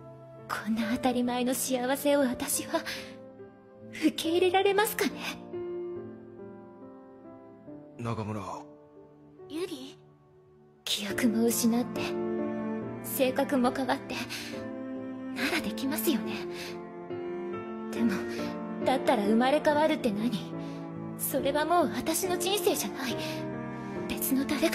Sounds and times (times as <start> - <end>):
Music: 0.0 - 24.7
Conversation: 0.4 - 24.7
Female speech, woman speaking: 0.5 - 3.0, 4.0 - 5.4, 9.5 - 10.0, 10.9 - 12.2, 13.1 - 14.3, 15.4 - 16.5, 17.9 - 20.5, 21.2 - 23.4, 24.1 - 24.7
Male speech, man speaking: 8.0 - 8.7.